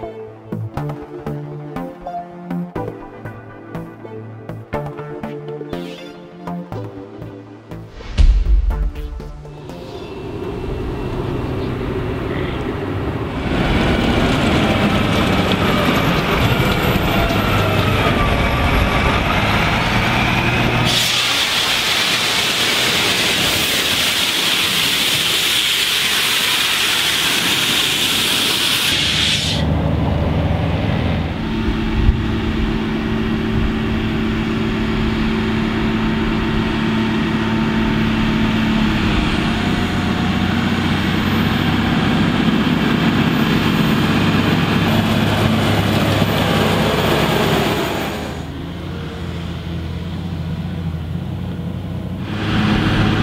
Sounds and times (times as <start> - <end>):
Vehicle: 9.5 - 53.2.